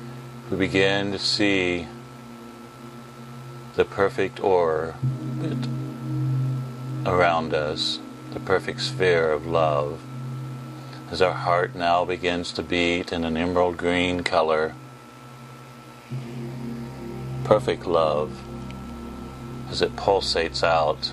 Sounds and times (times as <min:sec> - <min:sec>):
Speech: 0:00.5 - 0:02.0, 0:03.8 - 0:05.7, 0:07.1 - 0:10.0, 0:11.1 - 0:14.8, 0:17.5 - 0:18.4, 0:19.7 - 0:21.1.